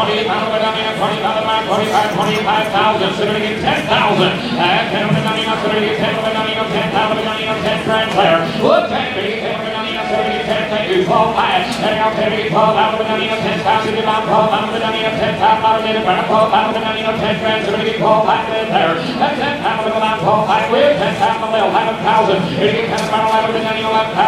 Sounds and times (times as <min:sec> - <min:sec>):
Speech: 0:00.0 - 0:24.2.